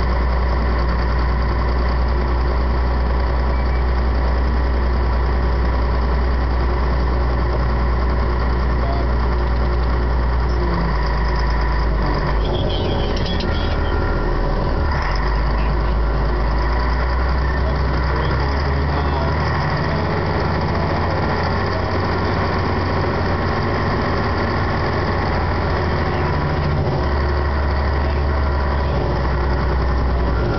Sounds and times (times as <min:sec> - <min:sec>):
Speech: 0:08.8 - 0:09.2, 0:17.4 - 0:22.0.